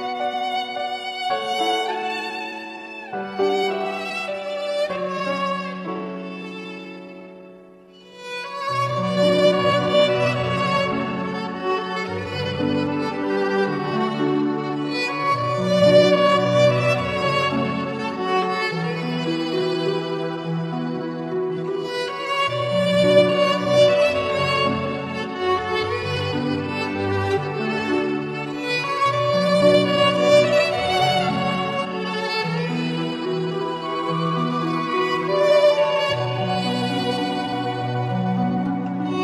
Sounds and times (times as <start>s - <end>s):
Violin, fiddle: 0.0s - 39.2s.